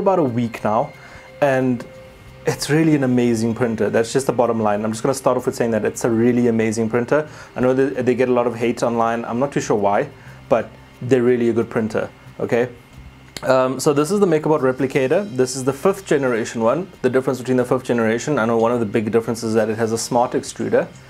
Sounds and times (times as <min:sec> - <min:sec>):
Speech: 0:00.0 - 0:01.9, 0:02.5 - 0:12.8, 0:13.4 - 0:21.0
Music: 0:00.0 - 0:21.0.